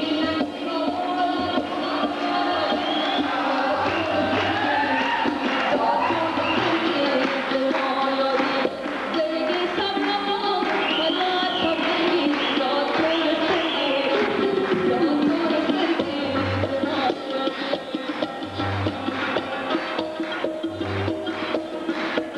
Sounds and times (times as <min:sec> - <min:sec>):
Music: 0:00.0 - 0:22.3.